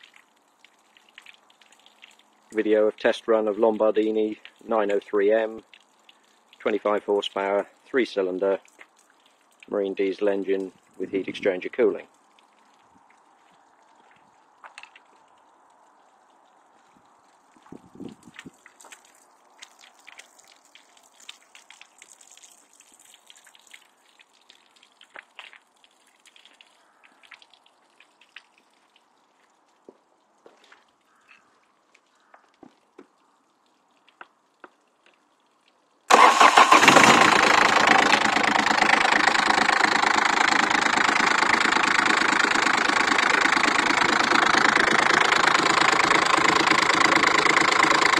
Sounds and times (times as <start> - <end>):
Engine starting: 36.1 - 48.1
Idling: 36.1 - 48.1
Medium engine (mid frequency): 36.1 - 48.1.